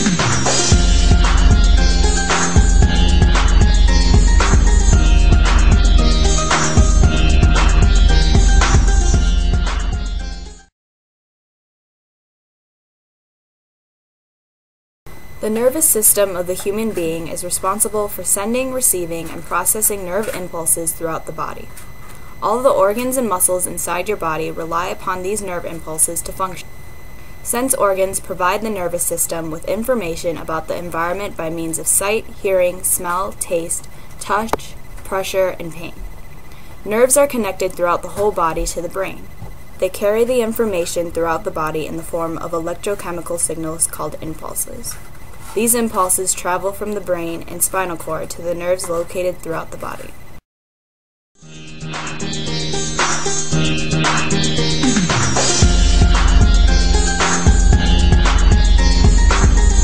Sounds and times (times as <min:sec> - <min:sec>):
Music: 0:00.0 - 0:10.7, 0:51.4 - 0:59.8
Speech: 0:15.4 - 0:21.7, 0:22.4 - 0:26.7, 0:27.5 - 0:36.0, 0:36.9 - 0:50.2.